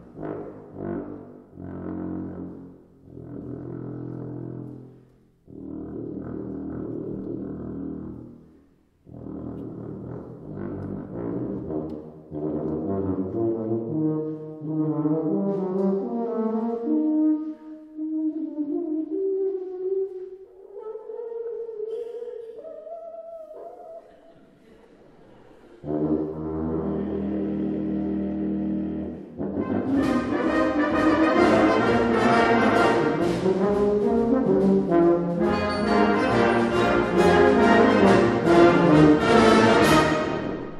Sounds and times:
Brass instrument: 0:00.0 - 0:21.9, 0:25.8 - 0:40.7.

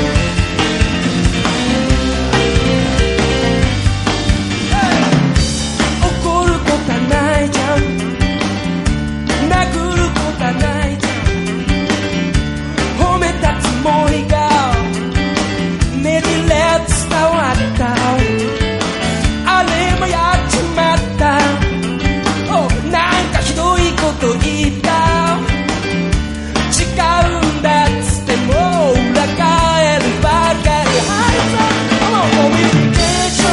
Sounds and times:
Music: 0:00.0 - 0:33.5.

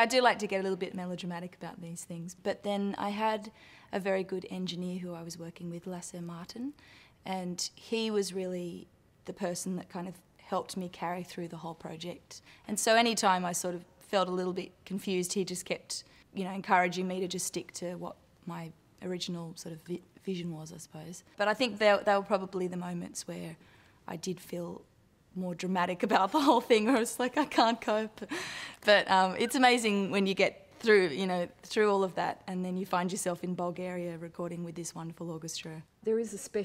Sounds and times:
Female speech, woman speaking: 0:00.0 - 0:36.6.

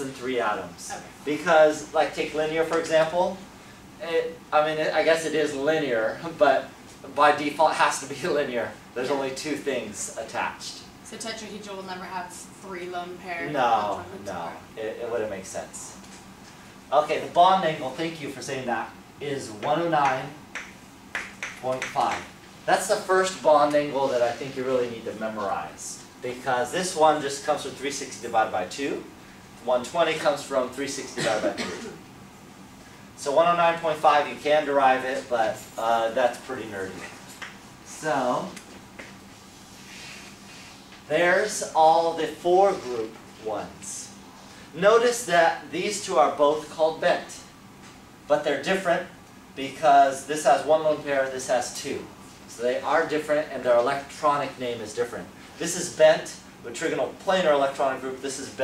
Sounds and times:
Speech: 0:00.0 - 0:16.0, 0:16.9 - 0:20.4, 0:21.6 - 0:32.0, 0:33.2 - 0:37.2, 0:37.9 - 0:38.6, 0:41.1 - 0:44.2, 0:44.8 - 0:47.6, 0:48.3 - 0:58.6.

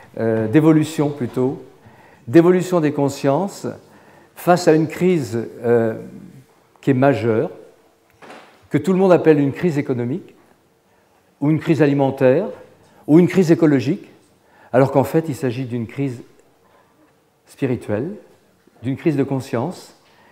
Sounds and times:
Speech: 0:00.0 - 0:07.8, 0:08.7 - 0:10.4, 0:11.4 - 0:16.4, 0:17.5 - 0:20.0.

